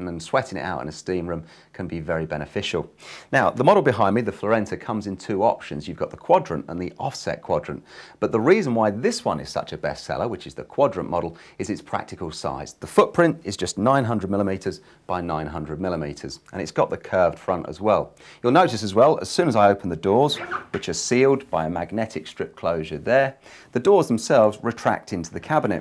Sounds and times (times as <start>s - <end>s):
Speech: 0.0s - 25.8s.